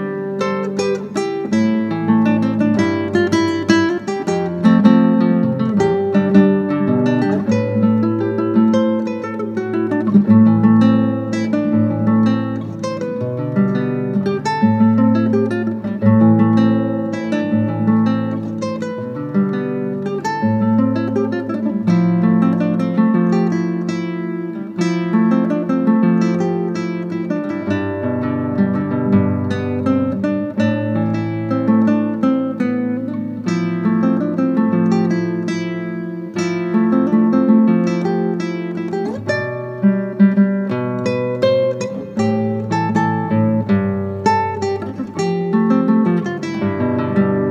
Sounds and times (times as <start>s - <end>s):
Acoustic guitar: 0.0s - 47.5s
Strum: 0.0s - 47.5s.